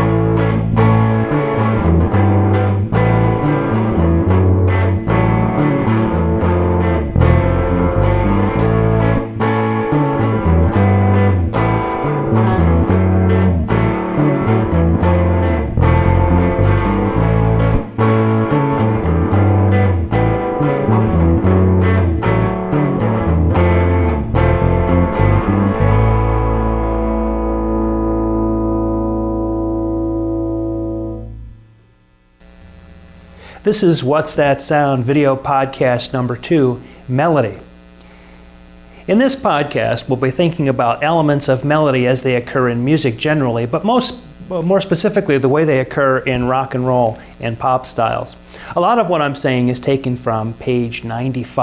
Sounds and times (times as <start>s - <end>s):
Music: 0.0s - 33.0s.